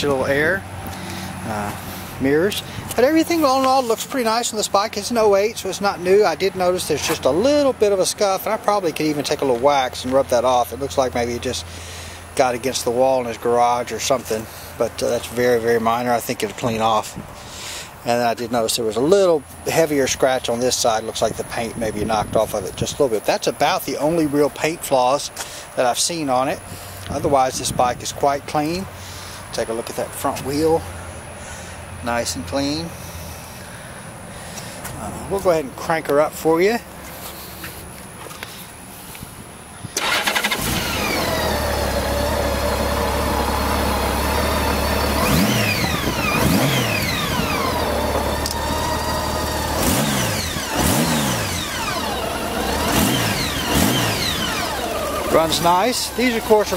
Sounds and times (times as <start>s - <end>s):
Motorcycle: 0.0s - 19.0s, 39.8s - 56.7s
Outside, rural or natural: 0.0s - 56.7s
Accelerating, revving, vroom: 40.6s - 42.3s, 44.3s - 55.2s.